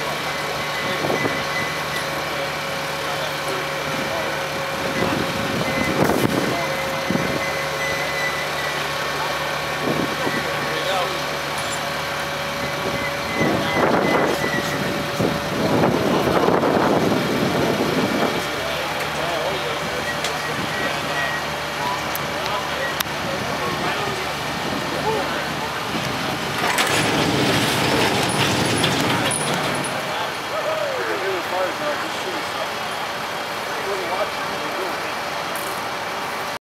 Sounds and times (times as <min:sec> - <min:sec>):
Truck: 0:00.0 - 0:36.6
Speech: 0:00.2 - 0:07.4, 0:08.8 - 0:11.4, 0:13.3 - 0:14.8, 0:18.3 - 0:26.3, 0:29.1 - 0:35.6.